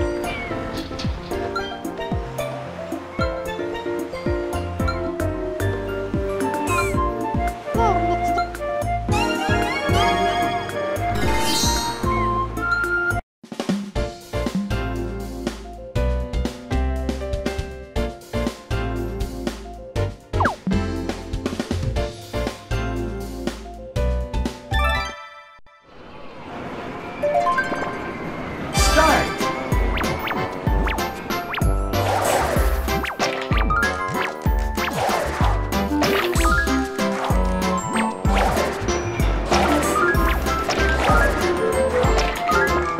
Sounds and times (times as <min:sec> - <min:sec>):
Music: 0:00.0 - 0:25.9, 0:27.2 - 0:43.0
Speech: 0:07.7 - 0:08.5, 0:28.8 - 0:29.4.